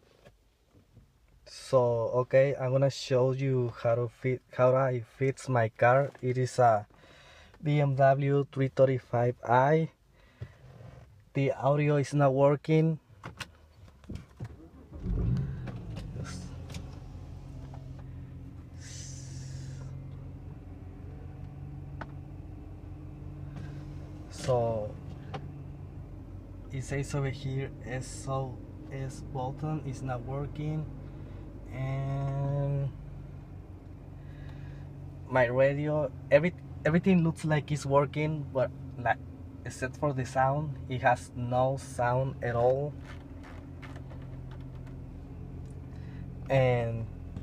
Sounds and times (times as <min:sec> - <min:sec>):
Speech: 0:01.5 - 0:06.9, 0:07.6 - 0:10.0, 0:11.4 - 0:13.0, 0:16.1 - 0:16.5, 0:24.3 - 0:25.0, 0:26.7 - 0:30.9, 0:31.7 - 0:33.0, 0:35.3 - 0:43.0, 0:46.5 - 0:47.1.